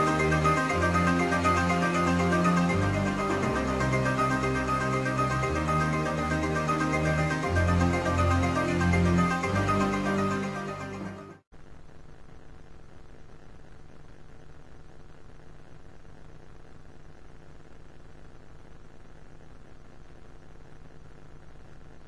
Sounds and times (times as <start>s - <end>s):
Music: 0.0s - 11.5s.